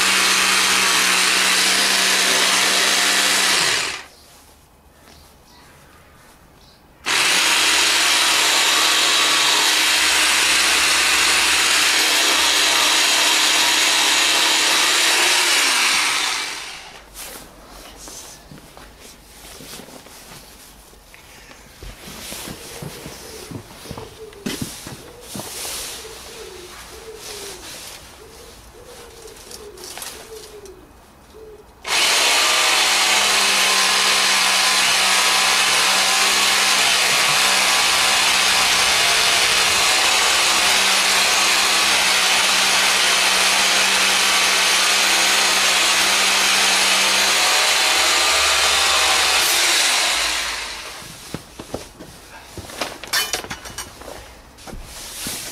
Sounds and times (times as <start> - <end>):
Power tool: 0.0 - 4.1, 7.0 - 17.0, 31.8 - 51.1.